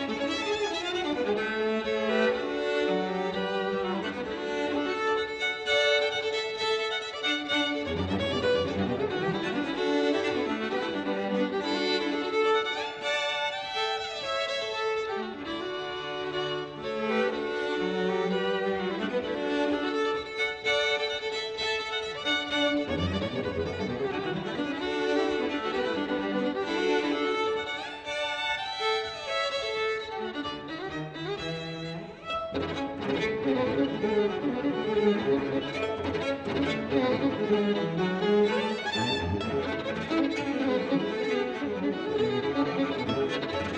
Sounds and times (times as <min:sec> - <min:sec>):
Cello: 0:00.0 - 0:43.7
Violin, fiddle: 0:00.0 - 0:43.7.